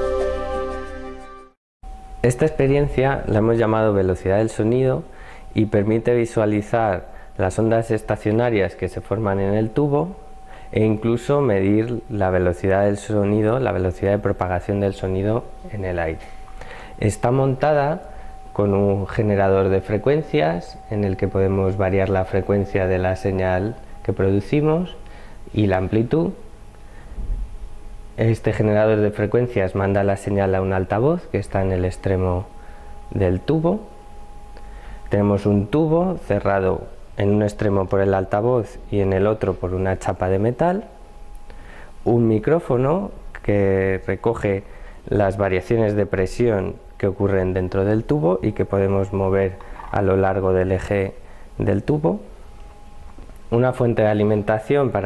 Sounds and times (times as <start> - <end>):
Speech: 2.2 - 16.2, 17.0 - 26.4, 28.2 - 32.5, 33.1 - 33.9, 35.1 - 41.0, 42.0 - 52.3, 53.5 - 55.0.